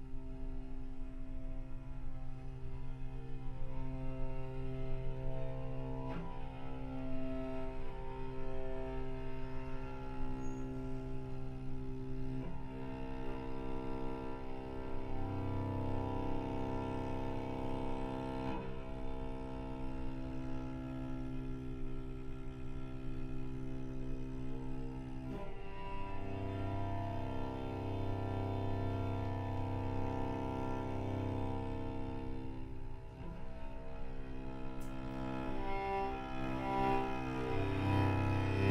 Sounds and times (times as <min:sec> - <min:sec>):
Cello: 0:00.0 - 0:38.7.